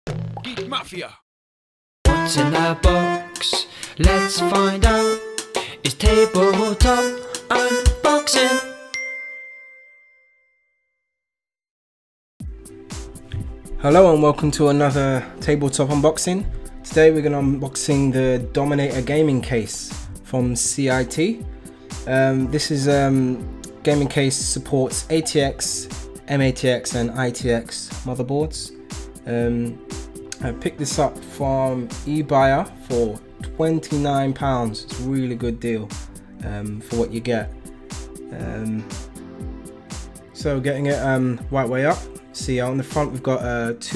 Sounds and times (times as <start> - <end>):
Music: 0.1 - 1.1, 2.0 - 9.6, 12.4 - 43.9
Speech: 0.4 - 1.2, 13.8 - 21.4, 22.1 - 29.8, 30.4 - 37.5, 38.3 - 38.9, 40.4 - 43.9.